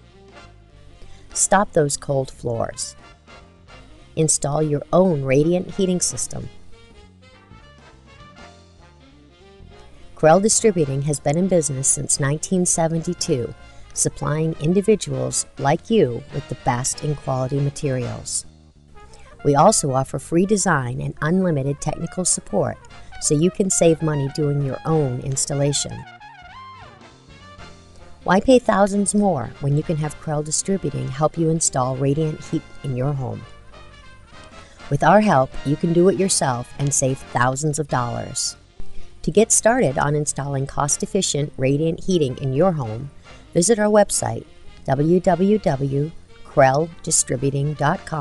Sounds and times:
Music: 0.0s - 48.2s
Speech: 1.4s - 2.9s, 4.2s - 6.5s, 10.2s - 18.5s, 19.4s - 26.0s, 28.3s - 33.4s, 34.9s - 38.6s, 39.2s - 48.2s.

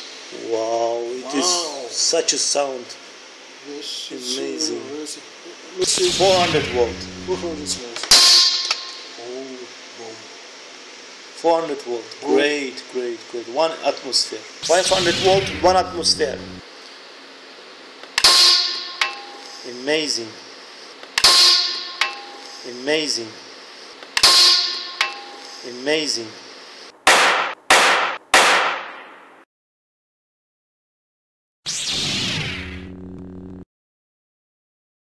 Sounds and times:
Clang: 22.0s - 22.4s, 25.0s - 25.4s.

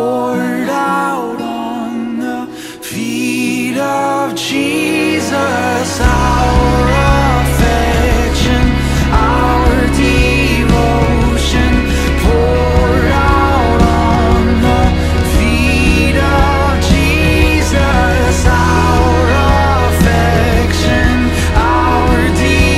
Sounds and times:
Music: 0.0s - 22.7s
Singing: 0.0s - 22.7s.

